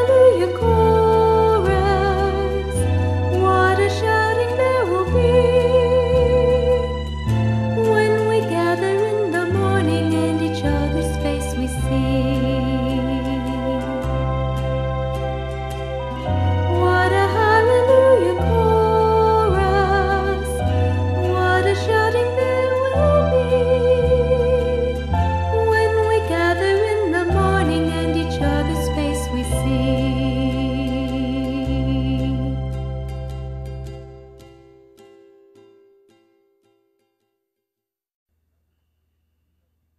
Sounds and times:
Tender music: 0:00.0 - 0:34.6.

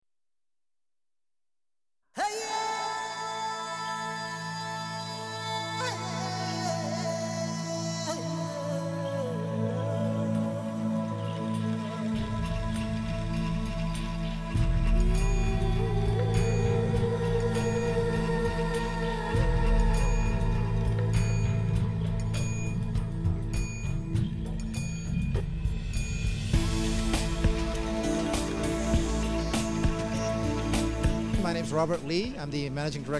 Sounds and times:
Music: 0:02.2 - 0:33.1.

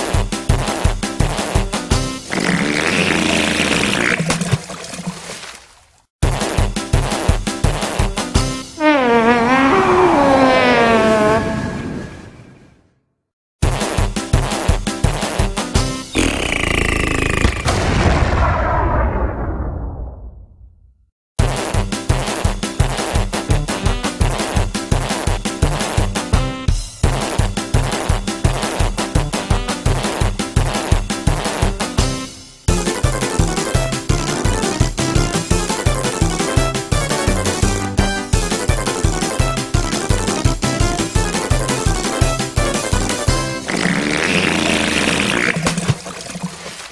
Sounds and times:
Music: 0:00.0 - 0:03.9, 0:06.2 - 0:09.1, 0:13.6 - 0:17.4, 0:21.4 - 0:44.4.

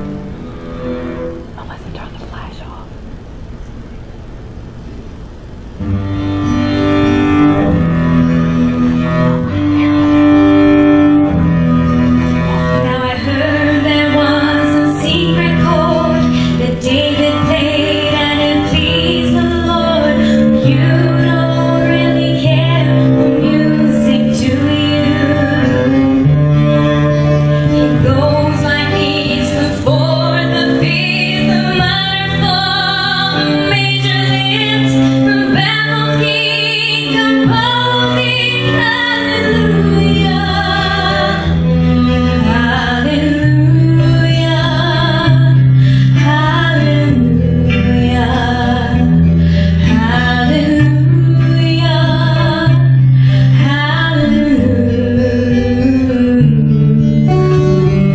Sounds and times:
Cello: 0:00.0 - 0:02.8, 0:05.7 - 0:58.1
Strum: 0:00.0 - 0:58.1
Female singing: 0:12.8 - 0:26.3, 0:27.9 - 0:41.5, 0:42.4 - 0:45.6, 0:46.2 - 0:49.1, 0:49.8 - 0:52.9, 0:53.6 - 0:56.6.

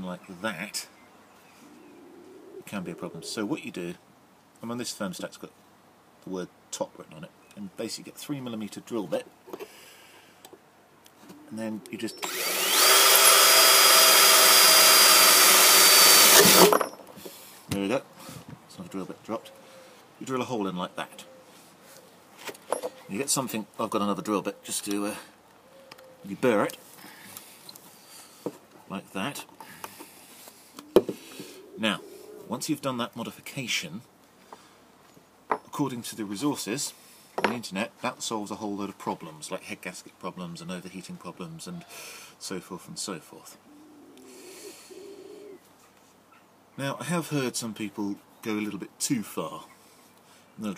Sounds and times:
Speech: 0:00.0 - 0:00.9, 0:02.7 - 0:04.0, 0:04.6 - 0:05.6, 0:06.2 - 0:09.3, 0:11.5 - 0:12.2, 0:17.7 - 0:18.1, 0:18.7 - 0:19.5, 0:20.2 - 0:21.3, 0:23.1 - 0:25.3, 0:26.2 - 0:26.8, 0:28.9 - 0:29.5, 0:31.8 - 0:34.1, 0:35.7 - 0:43.6, 0:46.8 - 0:49.7
Drill: 0:12.2 - 0:16.8
Wood: 0:12.2 - 0:17.4.

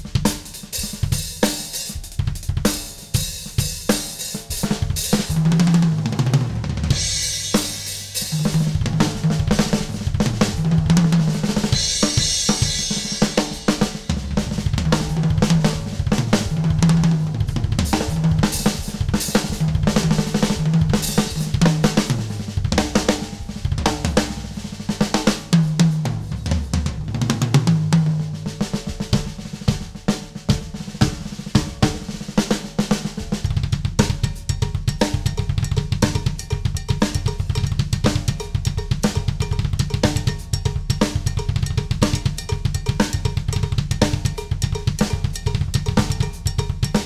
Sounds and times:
Drum kit: 0:00.0 - 0:47.0
Snare drum: 0:00.0 - 0:47.0.

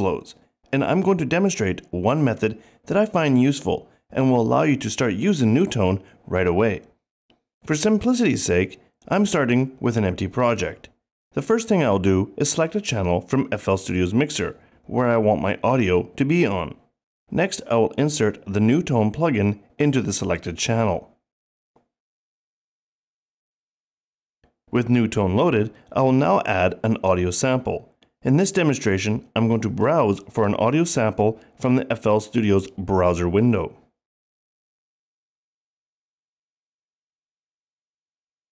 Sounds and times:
Speech: 0:00.0 - 0:07.0, 0:07.6 - 0:21.2, 0:24.7 - 0:33.9.

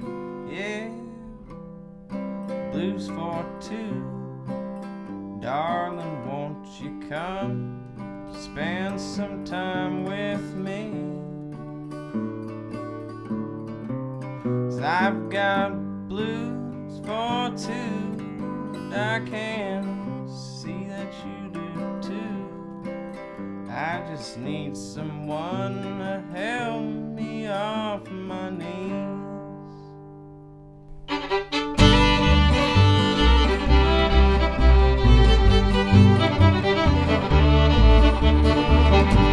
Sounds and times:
Blues: 0:00.0 - 0:39.3.

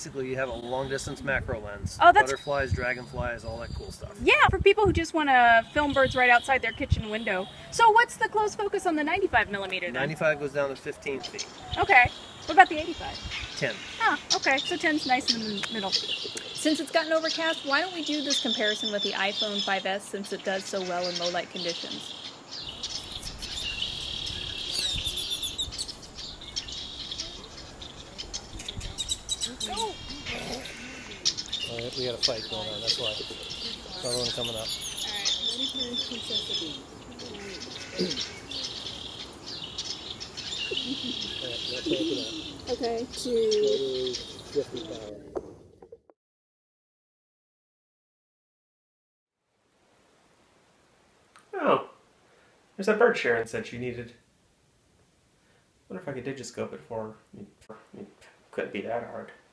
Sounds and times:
Chirp, tweet: 0:11.2 - 0:45.2.

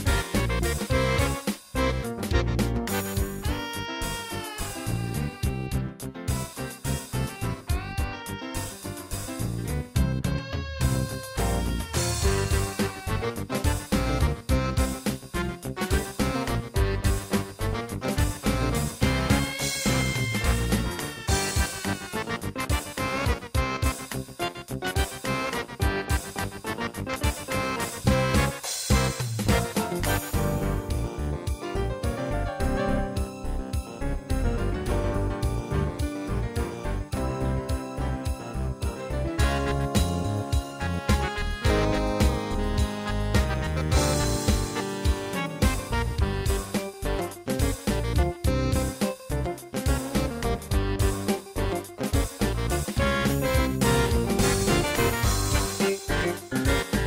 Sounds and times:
Theme music: 0:00.0 - 0:57.0.

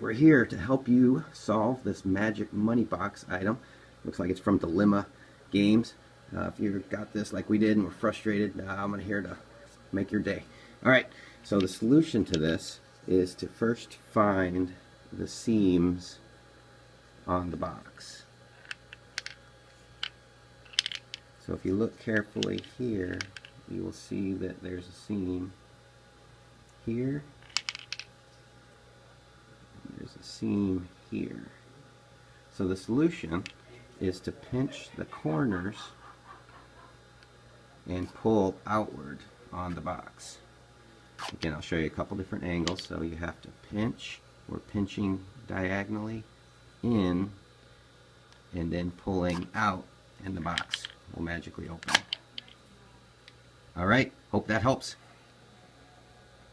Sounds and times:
Speech: 0:00.0 - 0:16.3, 0:17.2 - 0:18.3, 0:21.4 - 0:25.6, 0:26.8 - 0:27.3, 0:29.8 - 0:31.7, 0:32.5 - 0:36.0, 0:37.8 - 0:40.5, 0:41.2 - 0:47.4, 0:48.5 - 0:52.0, 0:53.7 - 0:55.7
Inside, small room: 0:00.0 - 0:56.5.

